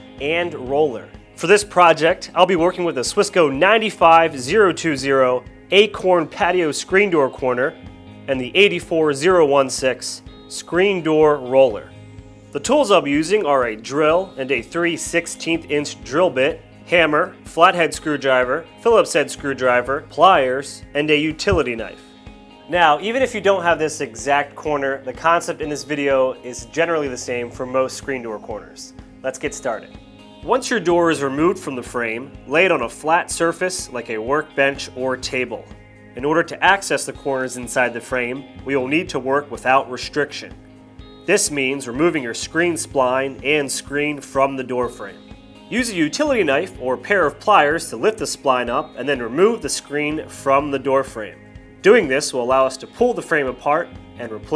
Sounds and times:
Music: 0.0 - 54.5
Speech: 0.2 - 11.9, 12.6 - 22.0, 22.7 - 40.6, 41.3 - 54.5.

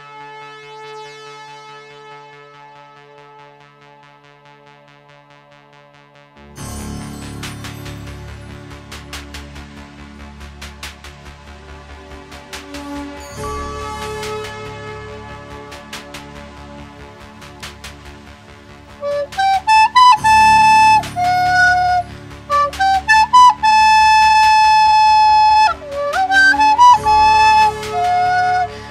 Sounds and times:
Flute: 12.6 - 16.7, 18.9 - 28.9.

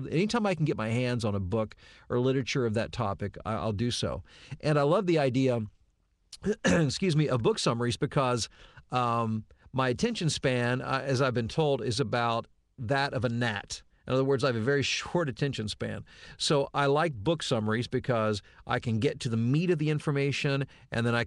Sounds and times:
Narration, monologue: 0.0 - 21.2.

